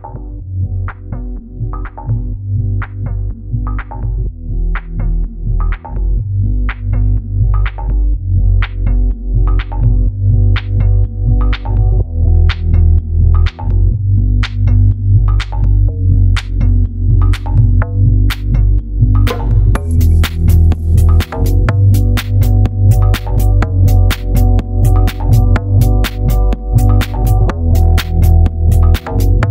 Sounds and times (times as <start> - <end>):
Music: 0.0 - 29.5.